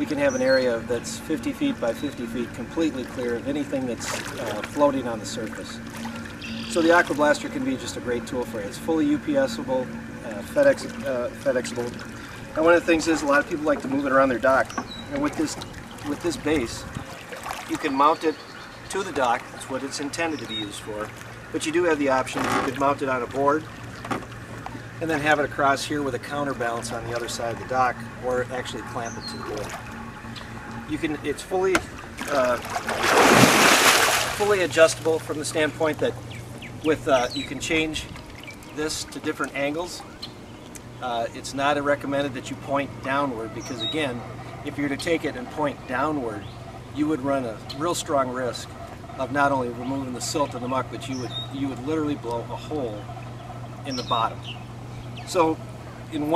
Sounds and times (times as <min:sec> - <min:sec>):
Speech: 0:00.0 - 0:05.8, 0:06.7 - 0:12.0, 0:12.6 - 0:16.9, 0:17.7 - 0:23.7, 0:25.0 - 0:29.8, 0:30.9 - 0:32.6, 0:34.4 - 0:36.2, 0:36.9 - 0:38.1, 0:38.8 - 0:40.0, 0:41.0 - 0:53.1, 0:53.9 - 0:54.4, 0:55.3 - 0:56.3.